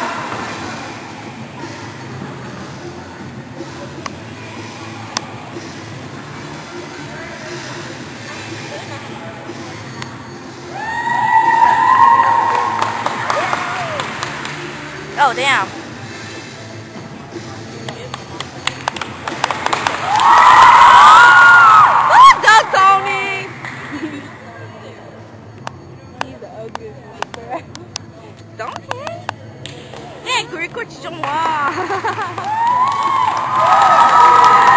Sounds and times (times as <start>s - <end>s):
Music: 0.0s - 34.7s.